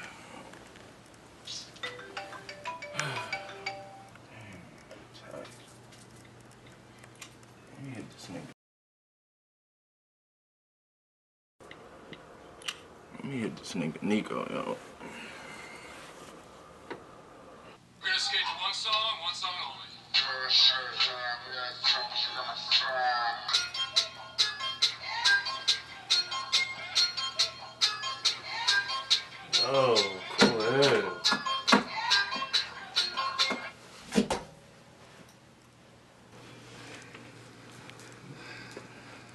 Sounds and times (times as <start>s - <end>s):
Music: 1.8s - 4.2s, 20.1s - 33.8s.